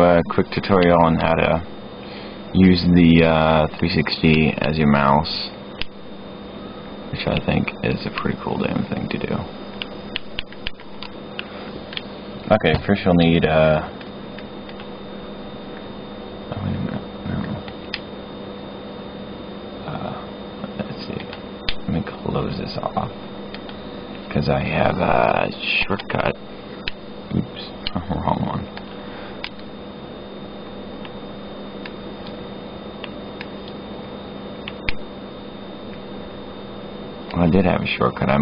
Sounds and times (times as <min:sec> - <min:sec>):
Speech: 0:00.0 - 0:01.7, 0:02.6 - 0:05.6, 0:07.1 - 0:09.5, 0:12.5 - 0:13.9, 0:16.5 - 0:17.6, 0:19.8 - 0:23.2, 0:24.3 - 0:26.4, 0:27.3 - 0:28.7, 0:37.3 - 0:38.4.